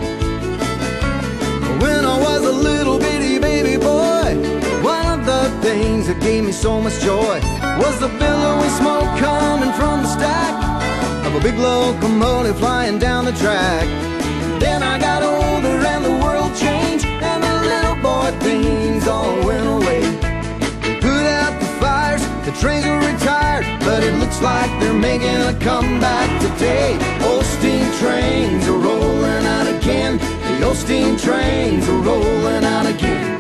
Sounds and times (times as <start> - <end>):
Funk: 0.0 - 33.4
Happy music: 0.0 - 33.4.